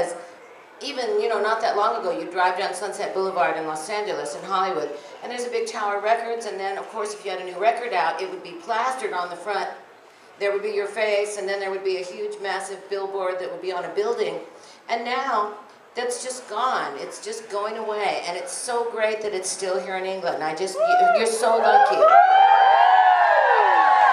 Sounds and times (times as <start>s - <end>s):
Female speech, woman speaking: 0.8s - 9.8s, 10.4s - 22.1s.